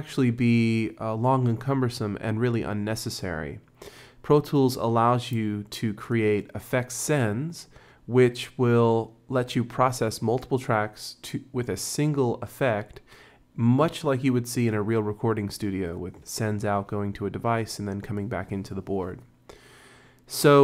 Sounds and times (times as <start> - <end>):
Speech: 0.0 - 19.3, 20.3 - 20.6.